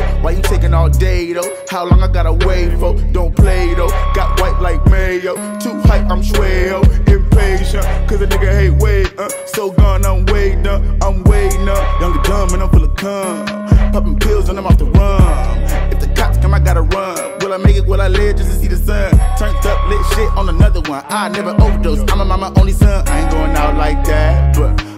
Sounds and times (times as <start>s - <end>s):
Rapping: 0.0s - 24.9s.